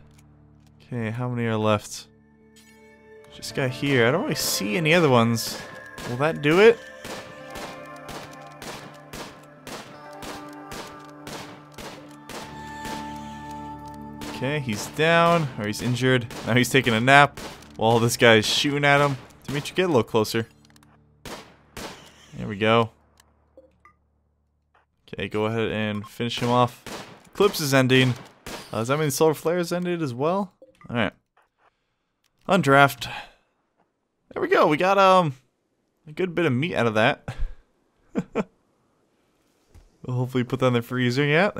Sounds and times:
Music: 0.0s - 22.2s
Speech: 0.8s - 2.1s, 3.4s - 6.8s, 14.4s - 20.5s, 22.3s - 22.9s, 25.1s - 26.8s, 27.4s - 31.2s, 32.5s - 33.3s, 34.3s - 35.4s, 36.1s - 37.3s, 40.0s - 41.5s.

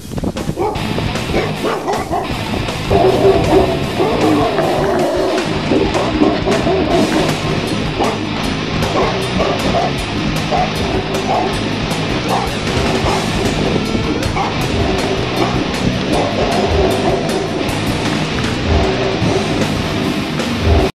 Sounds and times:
Music: 0.0s - 20.9s
Bow-wow: 0.5s - 11.6s, 12.2s - 13.4s, 14.4s - 17.8s, 18.6s - 19.8s.

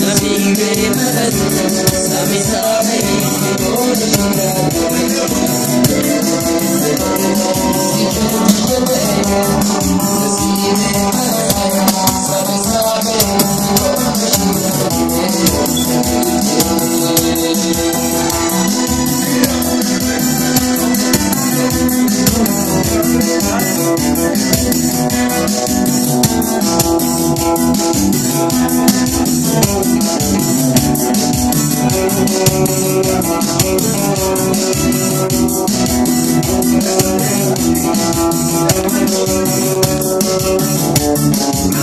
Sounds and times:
Music: 0.0s - 41.8s
Speech: 20.8s - 24.6s.

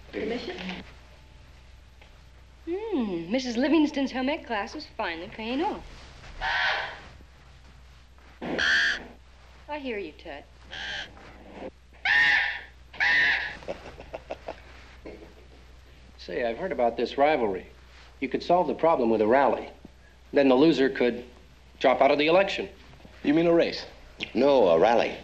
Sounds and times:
Speech: 9.7s - 10.5s, 20.4s - 25.2s.

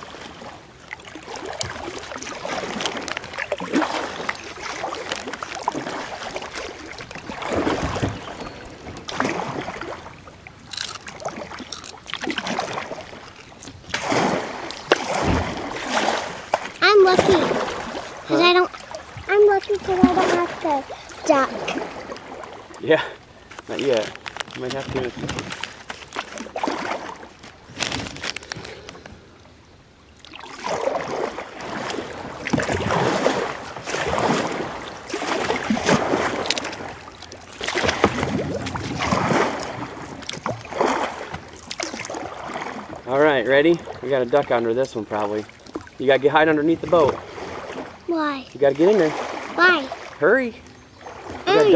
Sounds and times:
Rowboat, canoe, kayak: 0.0s - 51.7s.

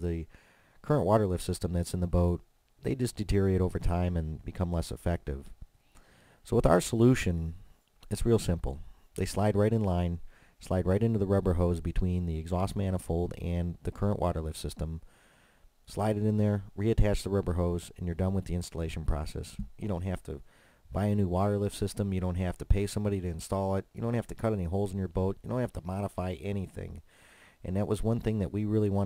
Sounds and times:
Speech: 0.0s - 5.6s, 6.4s - 15.0s, 15.9s - 27.0s, 27.6s - 29.0s.

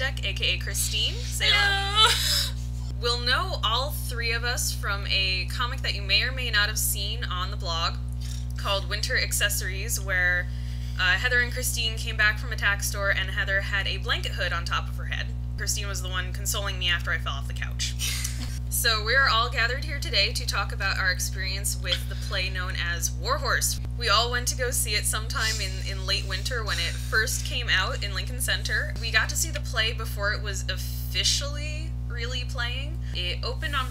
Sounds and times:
Speech: 0.0s - 2.0s, 2.9s - 8.0s, 8.6s - 18.0s, 18.7s - 33.9s.

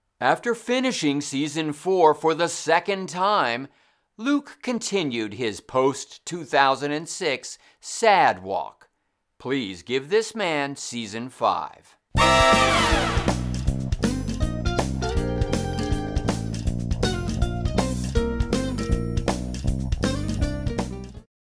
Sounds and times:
Music: 12.2s - 21.3s.

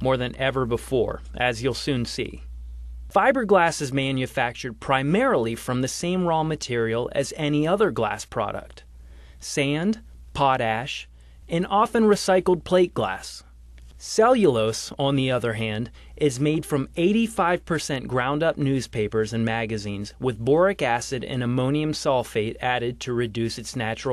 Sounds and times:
Speech: 0.0s - 2.5s, 3.1s - 8.8s, 9.4s - 24.1s.

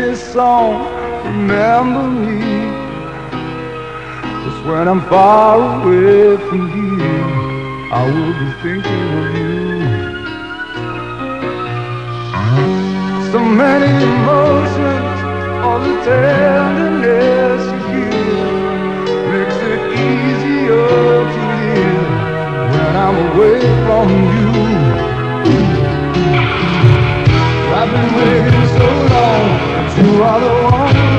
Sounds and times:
Music: 0.0s - 31.1s.

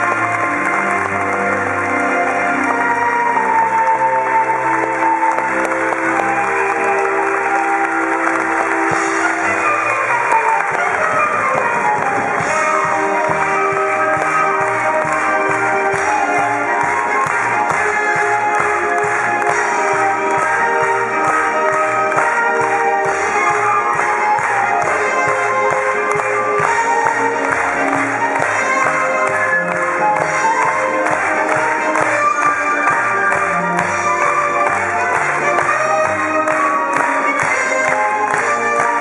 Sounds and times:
Funny music: 0.0s - 39.0s.

